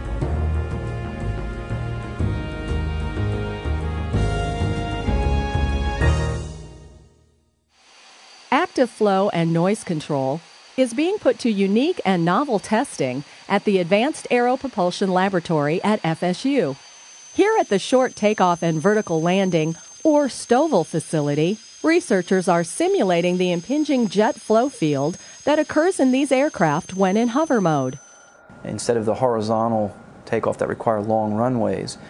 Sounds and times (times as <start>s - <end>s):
Speech: 8.5s - 16.8s, 28.6s - 32.0s.